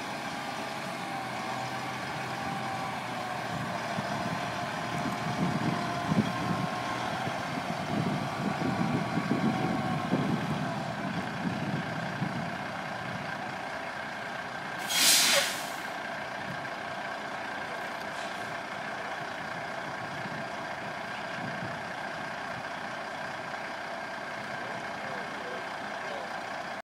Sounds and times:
Truck: 0.0 - 26.8
Speech: 24.6 - 26.4.

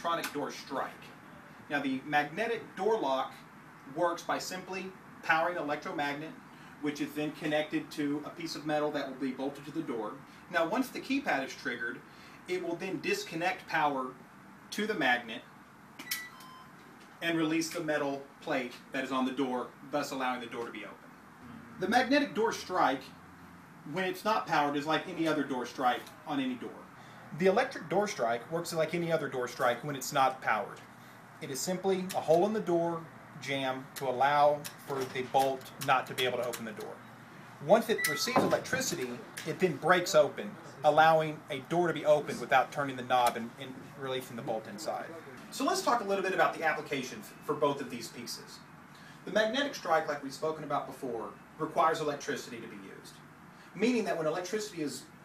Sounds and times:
Speech: 0.0 - 15.5, 17.2 - 21.0, 21.8 - 23.2, 23.9 - 37.0, 37.6 - 53.2, 53.8 - 55.1.

